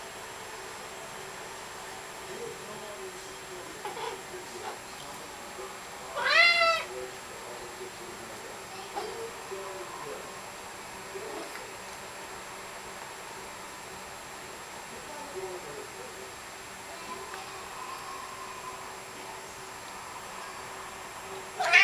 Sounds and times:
Speech: 1.8s - 10.4s, 11.1s - 11.8s, 14.9s - 19.6s
Meow: 6.2s - 6.9s, 21.6s - 21.8s.

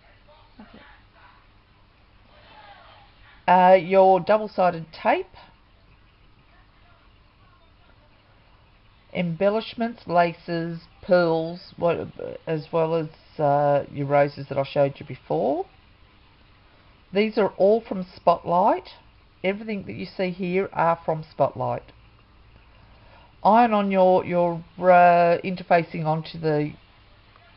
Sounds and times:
Speech: 2.3s - 5.5s, 9.1s - 15.7s, 17.1s - 21.9s, 23.4s - 26.8s.

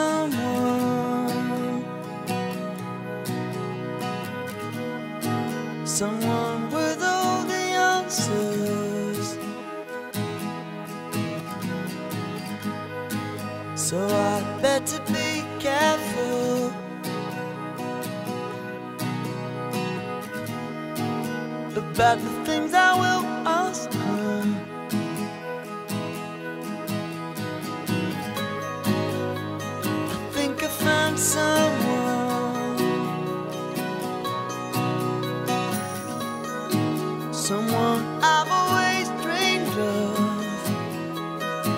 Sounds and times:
Music: 0.0s - 41.7s.

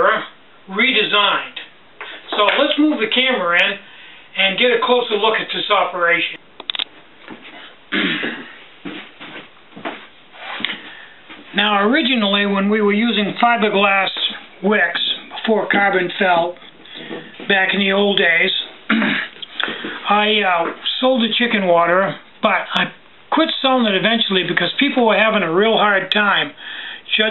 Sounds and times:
Speech: 0.0s - 6.4s, 11.5s - 16.7s, 17.4s - 18.8s, 20.0s - 27.3s.

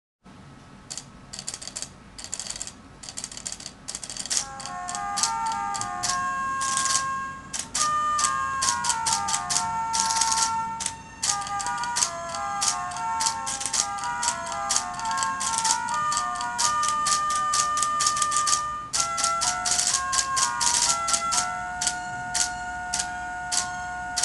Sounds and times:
Music: 4.2s - 24.2s.

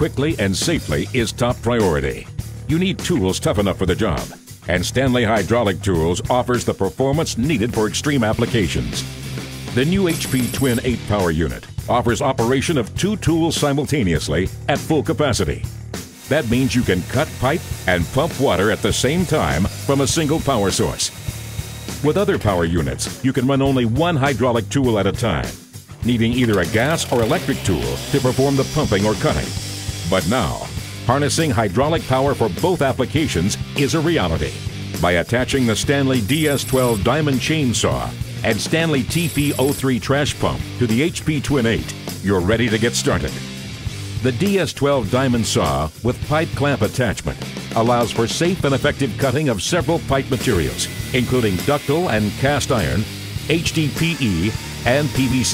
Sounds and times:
Speech: 0.0s - 9.1s, 9.7s - 15.7s, 16.3s - 21.2s, 22.0s - 43.4s, 44.2s - 55.5s
Music: 0.0s - 55.5s.

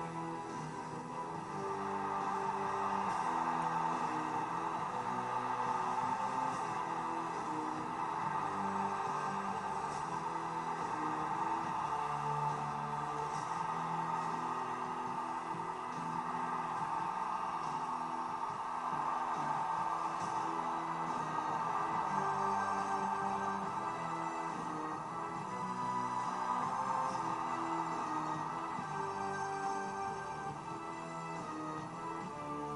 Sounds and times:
Music: 0.0s - 32.7s.

